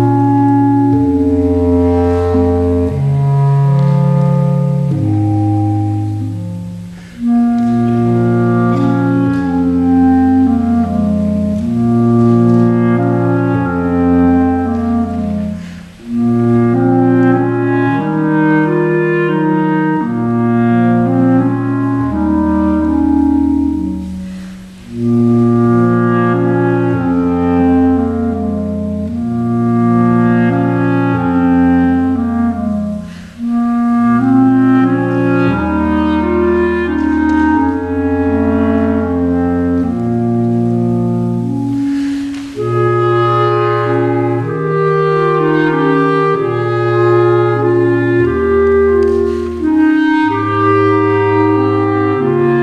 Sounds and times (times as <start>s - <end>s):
Clarinet: 0.0s - 52.6s
Classical music: 0.0s - 52.6s
Orchestra: 0.0s - 52.6s.